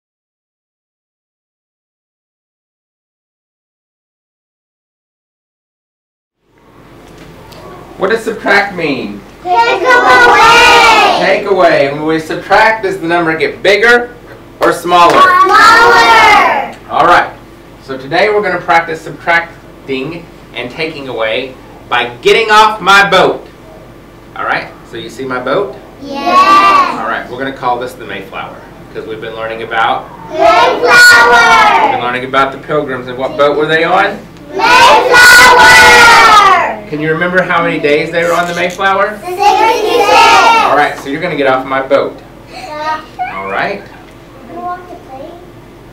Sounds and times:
Speech: 36.8s - 39.2s.

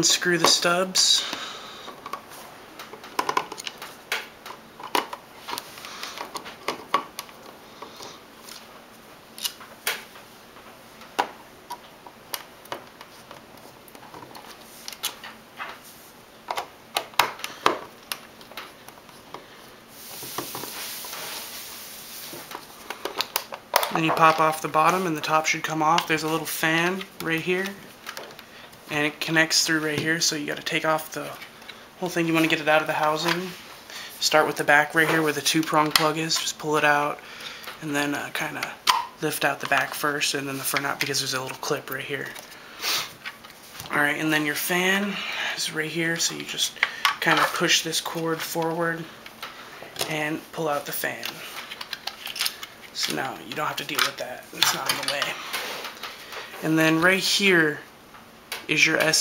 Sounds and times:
Speech: 0.0s - 1.3s, 23.9s - 27.8s, 28.9s - 31.4s, 32.0s - 33.6s, 34.2s - 37.2s, 37.8s - 42.4s, 43.9s - 49.1s, 50.0s - 51.5s, 53.0s - 55.4s, 56.6s - 57.9s, 58.7s - 59.2s
Inside, small room: 0.0s - 59.2s.

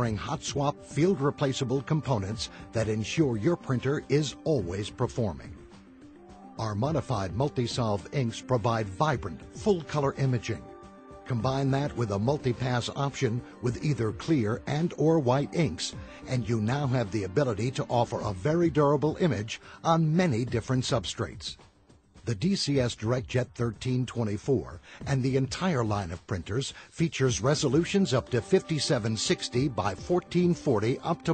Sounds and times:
Speech: 0.0s - 5.6s, 6.6s - 10.7s, 11.3s - 21.6s, 22.3s - 31.3s
Music: 0.0s - 31.3s.

